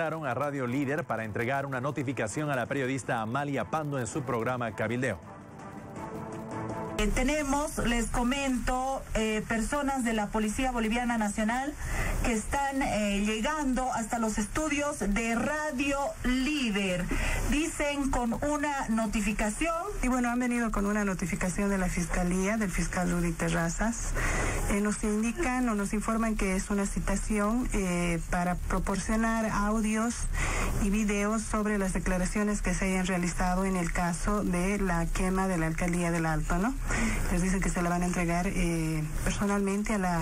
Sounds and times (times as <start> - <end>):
Speech: 0.0 - 5.2, 7.0 - 24.1, 24.7 - 40.2
Radio: 0.0 - 40.2.